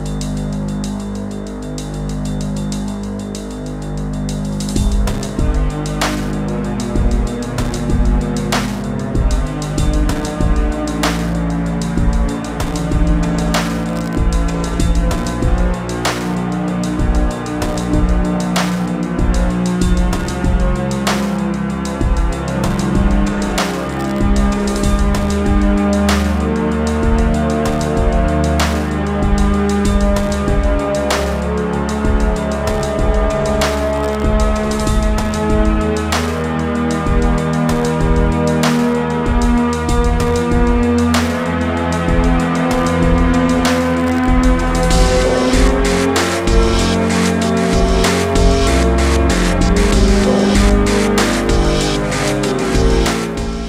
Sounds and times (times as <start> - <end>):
Music: 0.0 - 53.6.